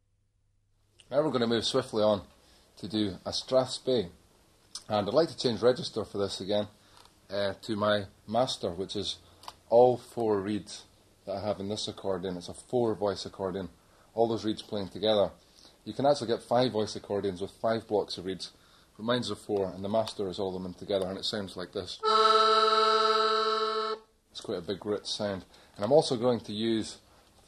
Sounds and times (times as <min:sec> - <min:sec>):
Speech: 0:01.0 - 0:04.2, 0:04.8 - 0:22.0, 0:24.4 - 0:27.1
Background music: 0:22.0 - 0:24.1.